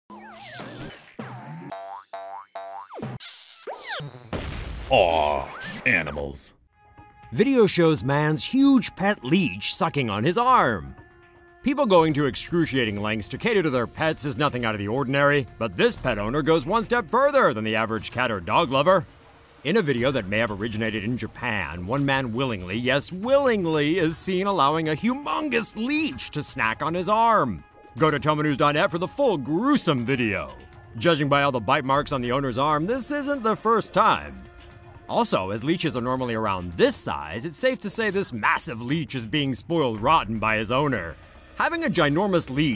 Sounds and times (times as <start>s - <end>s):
Speech: 4.9s - 6.6s, 7.3s - 11.0s, 11.7s - 19.0s, 19.7s - 34.4s, 35.1s - 42.7s
Music: 4.9s - 42.7s.